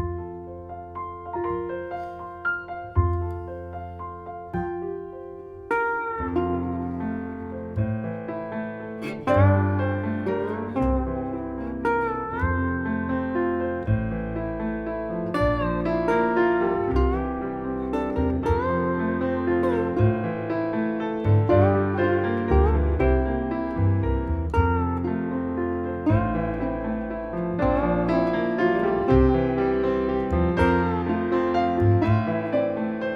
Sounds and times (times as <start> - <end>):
Piano: 0.0 - 33.1.